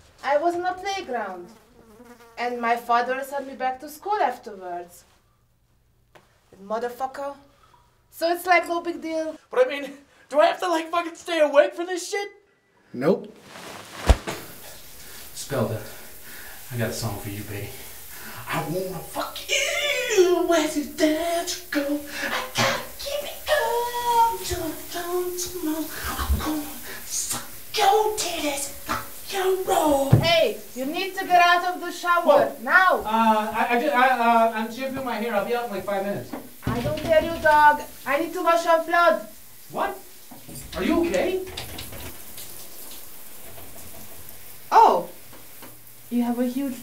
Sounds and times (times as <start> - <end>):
Inside, small room: 0.0 - 46.8.